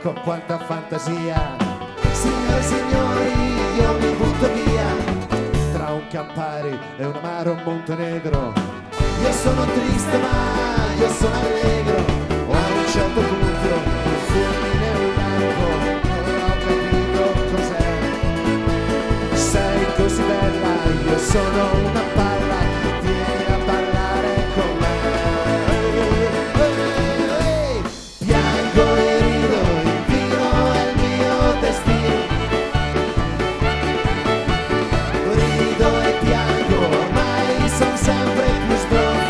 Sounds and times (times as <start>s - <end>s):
Orchestra: 0.0s - 6.2s, 8.6s - 39.2s.